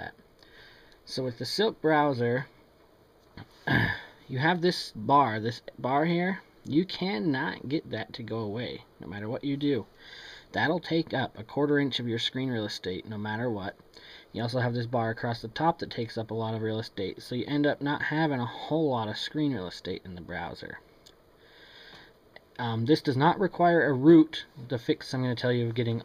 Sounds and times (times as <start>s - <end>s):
Speech: 0.0s - 0.2s, 1.1s - 2.6s, 3.7s - 9.9s, 10.6s - 13.8s, 14.4s - 20.8s, 22.6s - 26.0s.